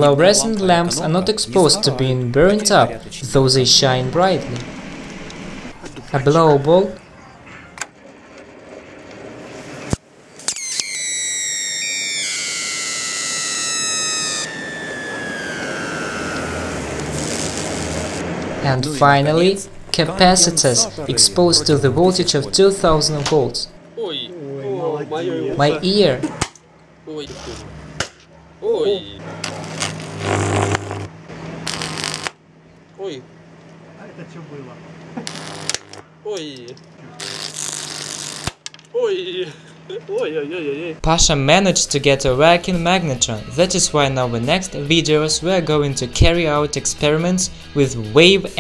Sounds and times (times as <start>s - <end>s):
Speech: 0.0s - 4.6s, 18.6s - 26.2s, 28.6s - 29.2s, 39.0s - 48.6s.